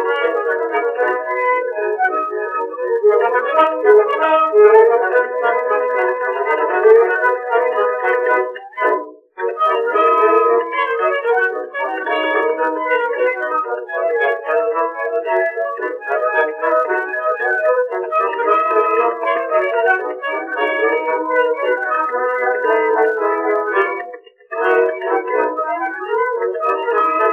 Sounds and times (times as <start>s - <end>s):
Music: 0.0s - 27.3s.